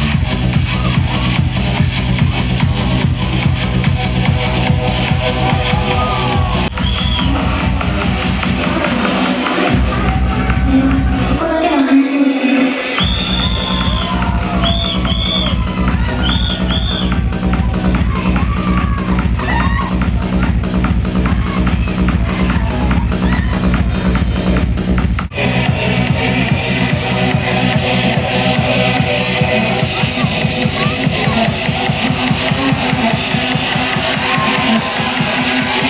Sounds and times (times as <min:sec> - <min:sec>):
Music: 0:00.0 - 0:35.9.